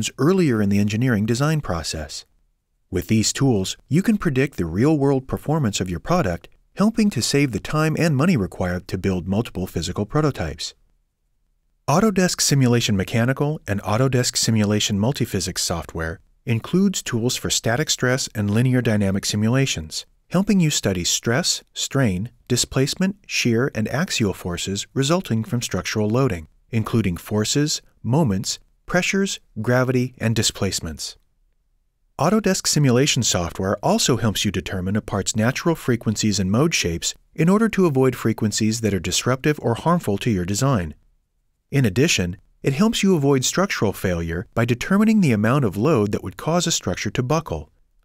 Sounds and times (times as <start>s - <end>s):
Speech: 0.0s - 2.3s, 2.9s - 10.8s, 11.9s - 31.2s, 32.2s - 41.0s, 41.7s - 47.7s.